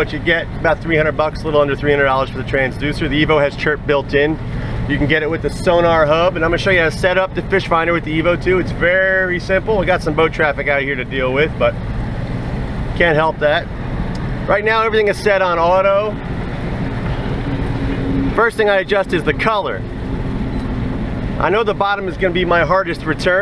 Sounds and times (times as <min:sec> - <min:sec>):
Speech: 0:00.0 - 0:11.8, 0:13.0 - 0:13.7, 0:14.5 - 0:16.2, 0:18.4 - 0:19.9, 0:21.4 - 0:23.4.